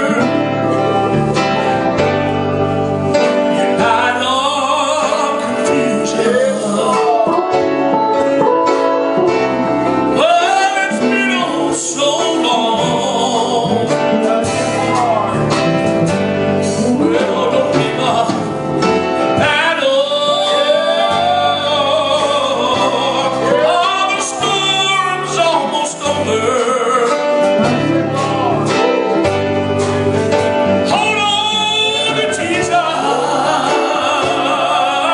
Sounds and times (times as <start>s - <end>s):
Male singing: 0.0s - 0.6s, 3.8s - 7.6s, 10.2s - 15.4s, 16.8s - 18.5s, 19.4s - 28.6s, 30.9s - 35.1s
Music: 0.0s - 35.1s.